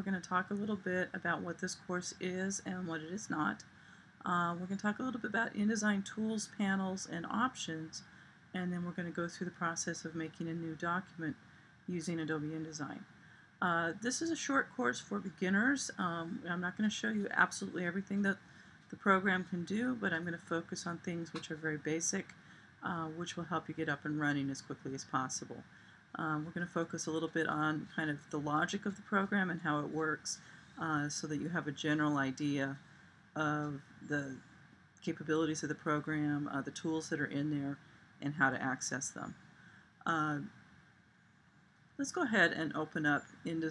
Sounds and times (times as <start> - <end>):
Speech: 0.0 - 13.0, 13.6 - 25.6, 26.2 - 32.8, 33.4 - 34.4, 35.0 - 39.3, 40.1 - 40.5, 42.0 - 43.7.